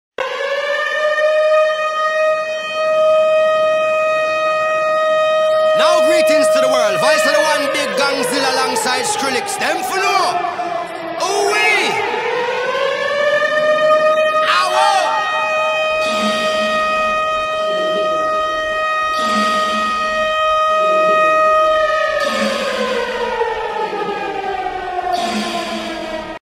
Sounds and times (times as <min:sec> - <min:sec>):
Siren: 0:00.2 - 0:26.4.